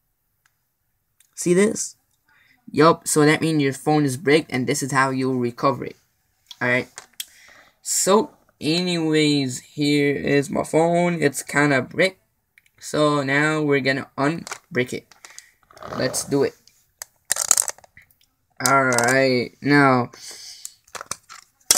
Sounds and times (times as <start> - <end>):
Inside, small room: 0.0 - 21.7
Speech: 1.3 - 6.0, 7.8 - 12.2, 12.8 - 15.1, 15.9 - 16.6, 18.6 - 20.2.